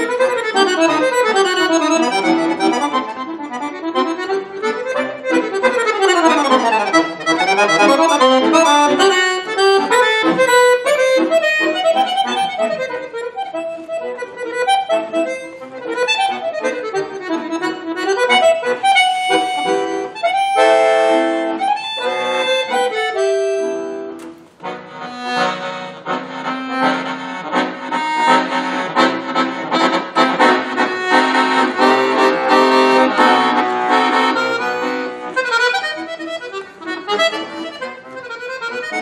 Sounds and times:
Accordion: 0:00.0 - 0:39.0.

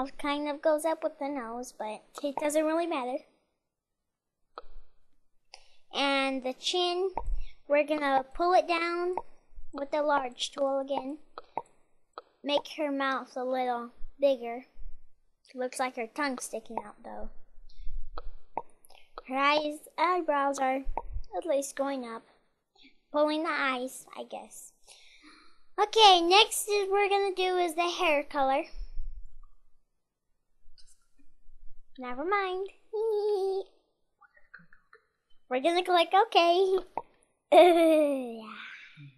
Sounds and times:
Speech: 0:00.0 - 0:03.2, 0:06.0 - 0:09.2, 0:09.8 - 0:11.2, 0:12.5 - 0:14.7, 0:15.5 - 0:17.3, 0:19.2 - 0:22.2, 0:23.2 - 0:24.7, 0:25.8 - 0:28.8, 0:32.0 - 0:33.6, 0:35.5 - 0:36.9, 0:37.6 - 0:39.1
Inside, small room: 0:00.0 - 0:39.1.

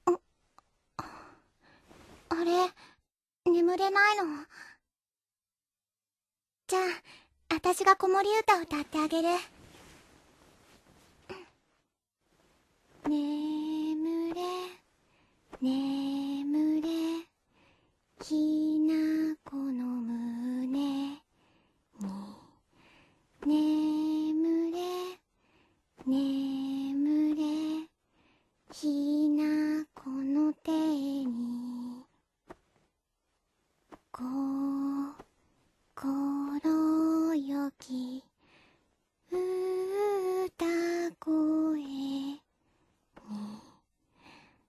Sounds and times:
Lullaby: 0:13.0 - 0:14.8, 0:15.6 - 0:21.3, 0:22.0 - 0:25.3, 0:26.0 - 0:28.0, 0:28.7 - 0:32.2, 0:34.1 - 0:35.2, 0:36.0 - 0:42.5, 0:43.2 - 0:44.6.

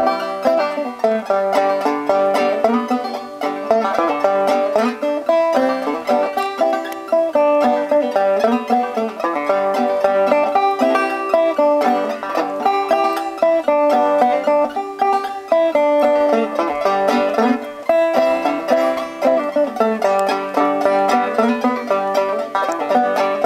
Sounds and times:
Music: 0:00.0 - 0:23.4.

